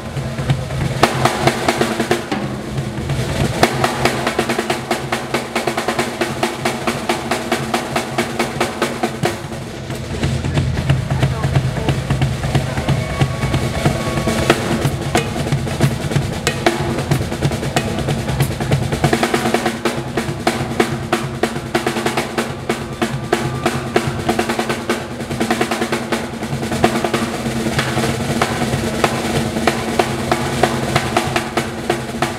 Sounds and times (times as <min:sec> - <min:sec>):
Drum kit: 0:00.0 - 0:32.3
Bass drum: 0:09.3 - 0:19.6.